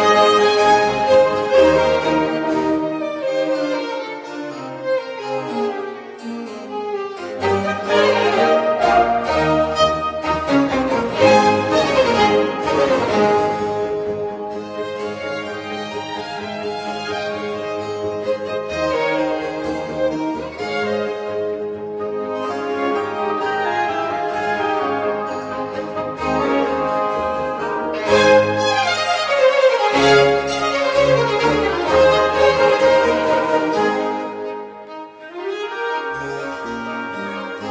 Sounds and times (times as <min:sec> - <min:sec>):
Violin, fiddle: 0:00.0 - 0:37.7.